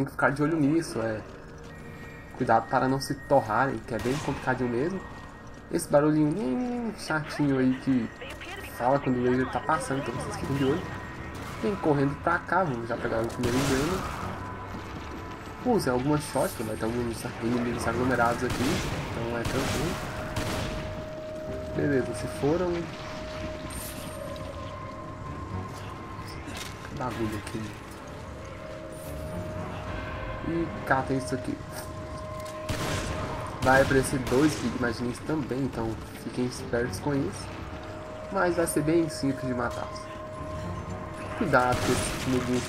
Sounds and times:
Speech: 5.8s - 10.9s.

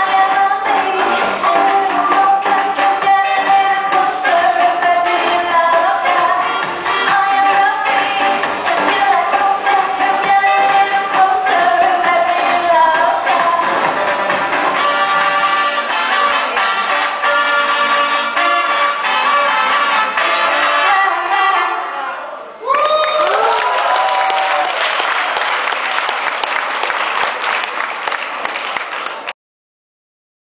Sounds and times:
Music: 0.0s - 22.0s.

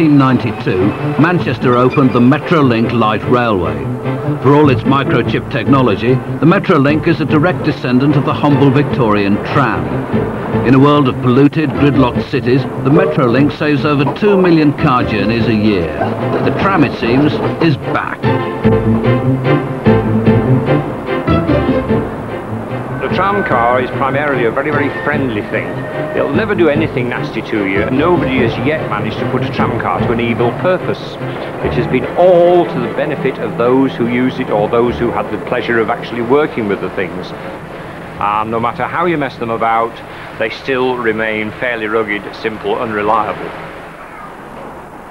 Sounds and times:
Speech: 0.0s - 9.9s, 10.6s - 18.3s, 23.0s - 37.4s, 38.2s - 43.6s
Music: 0.0s - 43.5s.

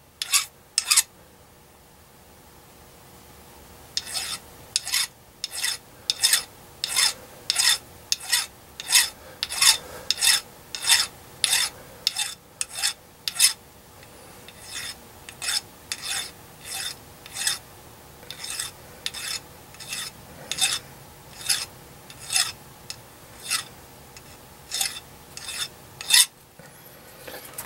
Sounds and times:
Rub: 0.2s - 1.0s, 4.0s - 13.6s, 14.5s - 17.6s, 18.3s - 22.6s, 23.4s - 26.3s
Filing (rasp): 0.2s - 1.1s, 4.0s - 13.6s, 14.5s - 17.6s, 18.3s - 22.6s, 23.4s - 26.3s.

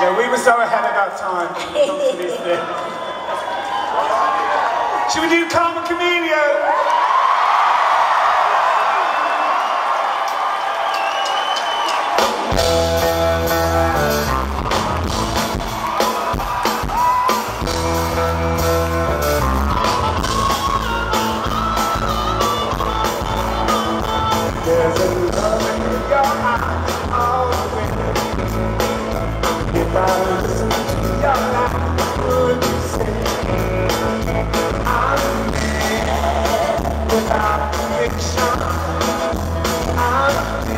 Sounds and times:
Music: 11.6s - 40.7s.

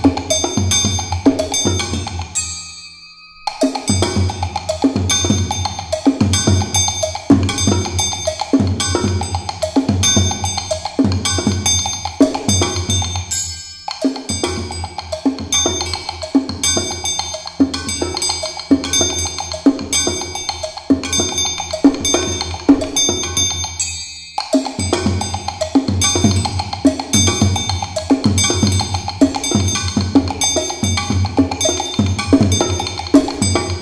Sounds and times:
Cowbell: 0.0s - 33.8s.

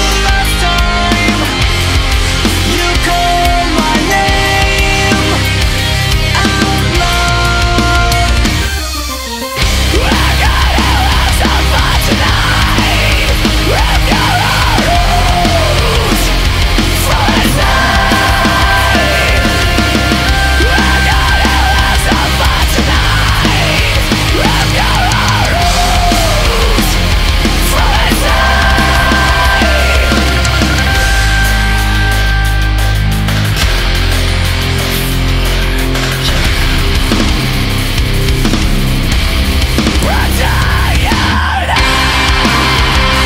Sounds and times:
Angry music: 0.0s - 43.2s.

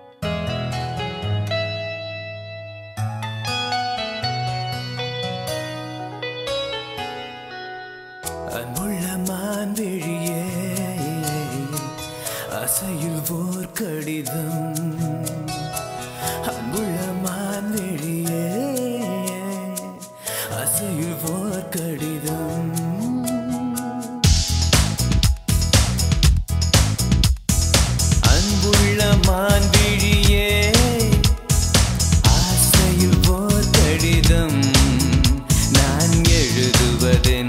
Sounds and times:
Music: 0.0s - 37.4s.

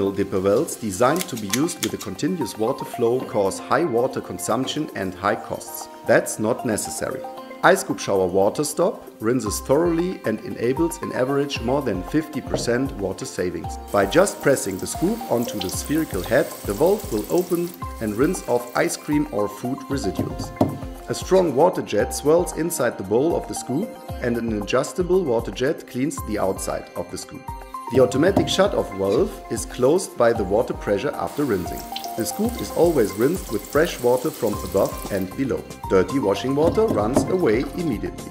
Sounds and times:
Music: 0.0s - 38.3s
Speech: 0.0s - 38.3s.

